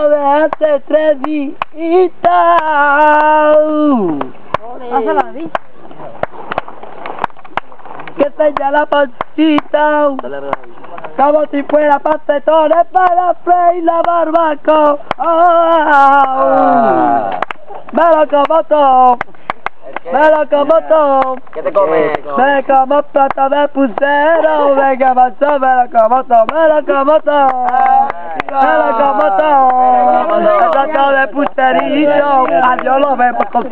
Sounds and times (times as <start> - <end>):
Speech: 19.8 - 33.7.